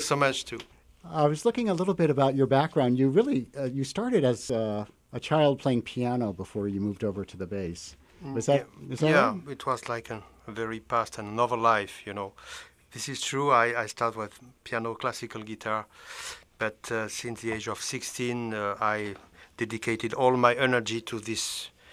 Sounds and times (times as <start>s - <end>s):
Speech: 0.0s - 15.9s, 16.6s - 21.7s.